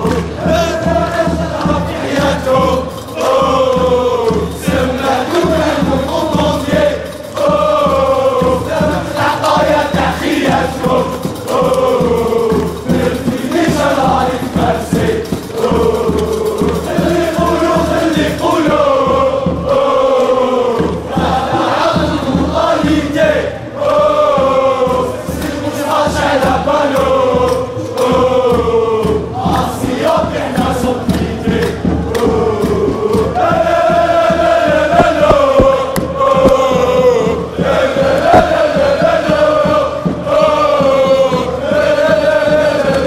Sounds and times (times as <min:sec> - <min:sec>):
Music: 0:00.0 - 0:43.0.